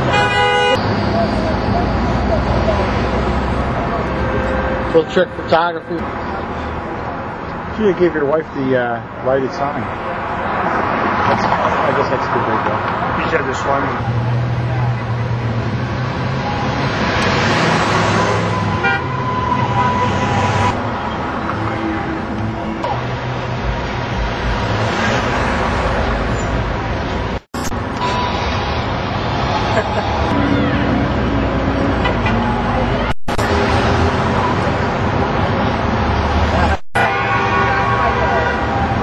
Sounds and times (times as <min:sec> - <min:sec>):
Vehicle horn, car horn, honking: 0:00.1 - 0:00.8, 0:18.3 - 0:20.7, 0:37.0 - 0:38.7.